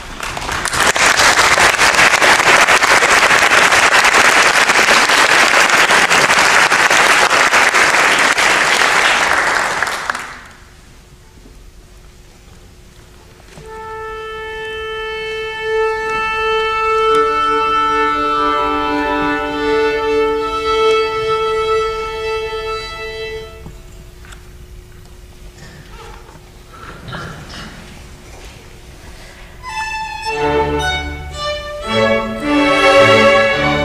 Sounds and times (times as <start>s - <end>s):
Violin, fiddle: 13.6s - 23.6s, 29.6s - 33.8s.